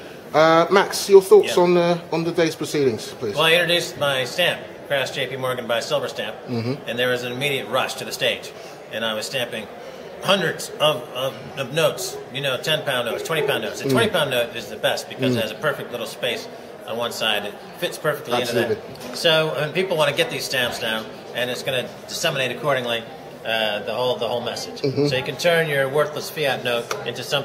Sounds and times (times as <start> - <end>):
Speech: 0.4 - 27.4.